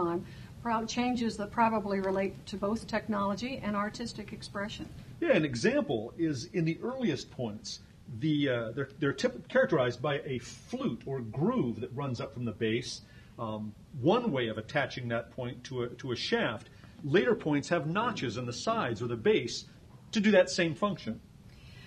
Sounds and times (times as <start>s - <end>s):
Speech: 0.0s - 21.2s.